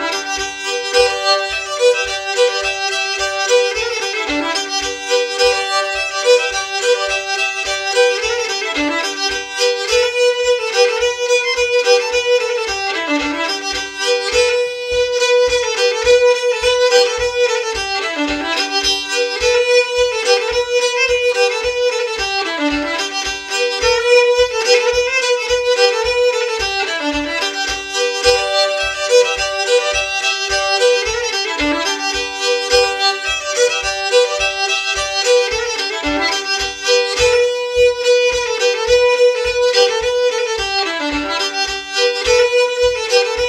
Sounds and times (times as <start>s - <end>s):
Violin, fiddle: 0.0s - 43.4s.